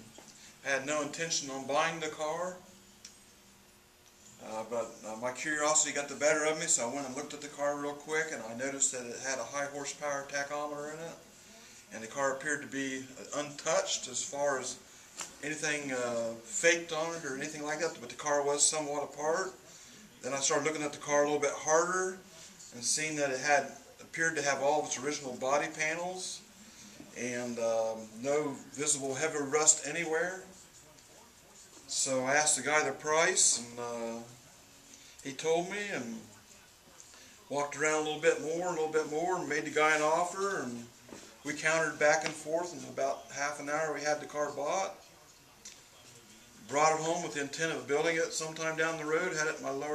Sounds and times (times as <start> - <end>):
Speech: 0.0 - 2.8, 4.4 - 49.9
Inside, small room: 0.0 - 49.9.